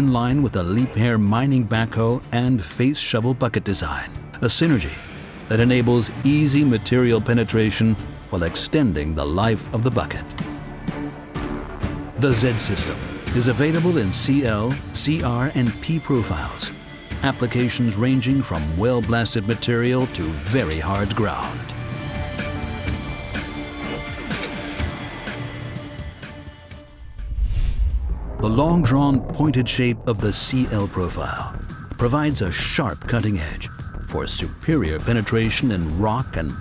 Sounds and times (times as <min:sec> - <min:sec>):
Speech: 0:00.0 - 0:10.4, 0:12.2 - 0:21.8, 0:28.4 - 0:36.6
Music: 0:00.0 - 0:36.6.